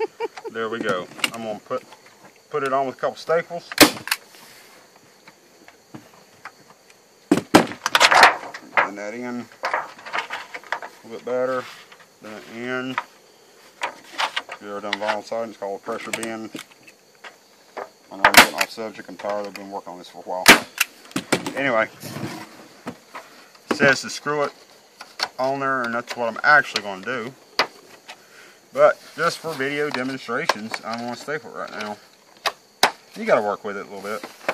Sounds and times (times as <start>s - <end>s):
Speech: 0.5s - 1.9s, 2.5s - 3.7s, 8.8s - 9.5s, 11.0s - 13.1s, 14.6s - 16.6s, 18.1s - 20.5s, 21.5s - 21.9s, 23.7s - 24.6s, 25.4s - 27.4s, 28.8s - 32.0s, 33.2s - 34.3s.